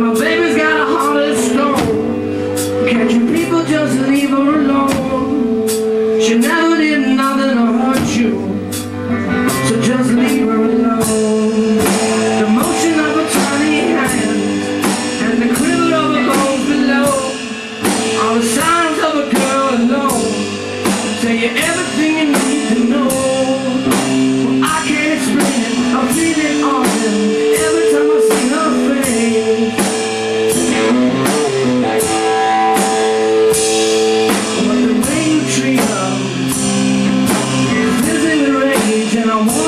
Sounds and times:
Music: 0.0s - 39.6s.

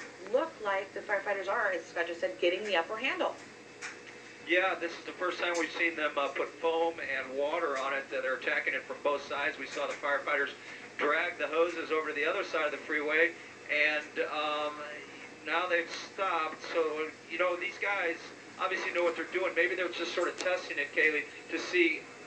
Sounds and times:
Speech: 0.2s - 3.4s, 4.5s - 22.0s.

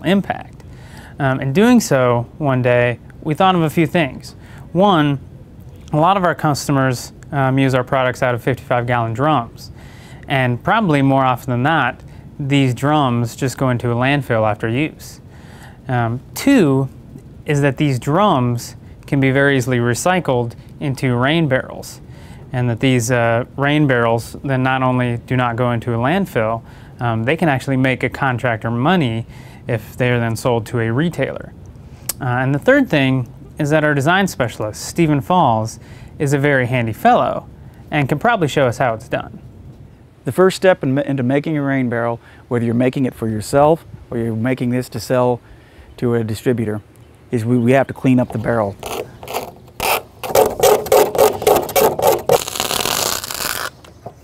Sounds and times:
Speech: 0.0s - 0.6s, 1.2s - 5.2s, 5.9s - 15.2s, 15.9s - 39.4s, 40.2s - 45.4s, 46.0s - 48.8s.

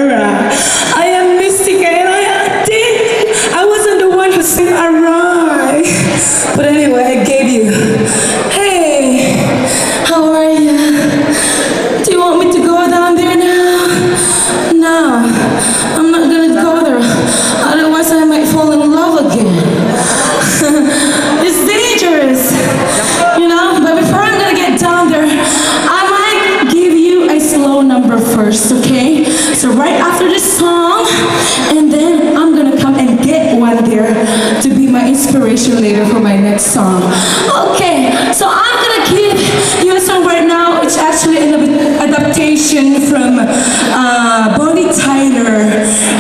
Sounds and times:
Speech: 0.0s - 11.3s, 12.0s - 46.2s.

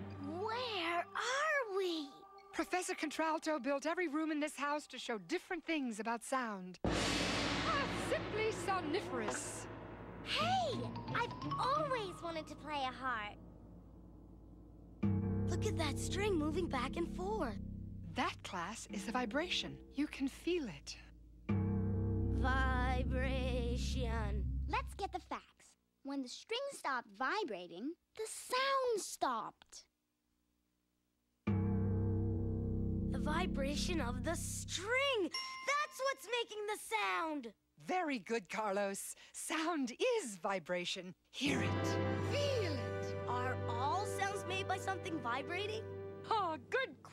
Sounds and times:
Speech: 0.2s - 6.8s, 7.6s - 9.7s, 10.3s - 13.4s, 15.5s - 17.6s, 18.2s - 21.1s, 22.4s - 29.9s, 33.2s - 47.1s.

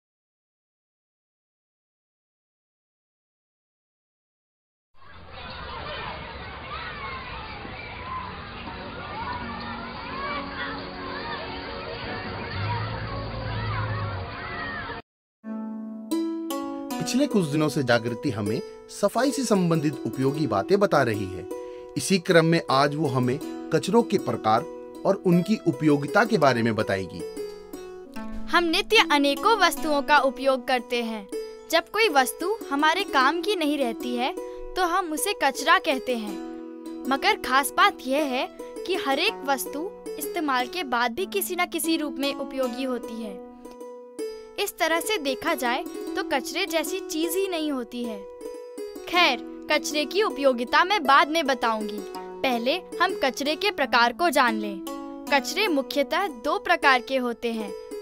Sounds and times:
Music: 7.0s - 58.0s.

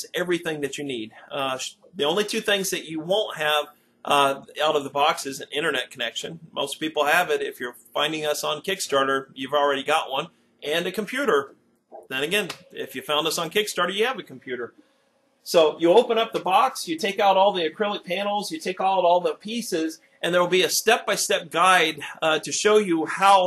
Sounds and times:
Speech: 0.0s - 14.7s, 15.5s - 23.4s.

